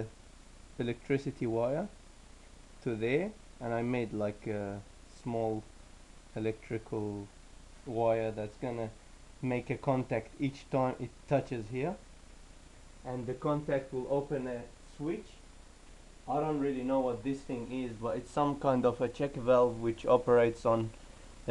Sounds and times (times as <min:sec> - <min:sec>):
Speech: 0:00.8 - 0:02.0, 0:02.8 - 0:05.7, 0:06.4 - 0:12.0, 0:13.0 - 0:15.4, 0:16.3 - 0:21.5.